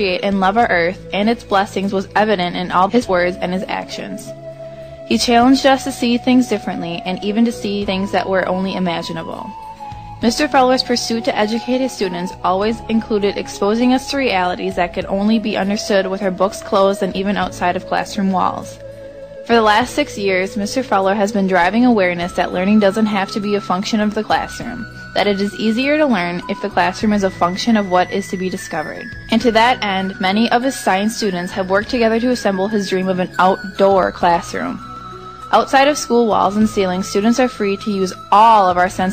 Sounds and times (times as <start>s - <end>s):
Speech: 0.0s - 4.3s, 5.1s - 9.6s, 10.2s - 18.8s, 19.5s - 34.8s, 35.5s - 39.1s
Music: 0.0s - 39.1s.